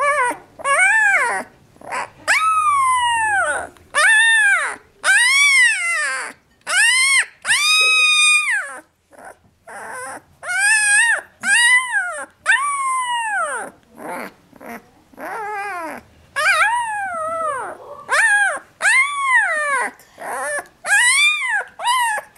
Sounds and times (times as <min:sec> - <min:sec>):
Dog: 0:00.0 - 0:22.3.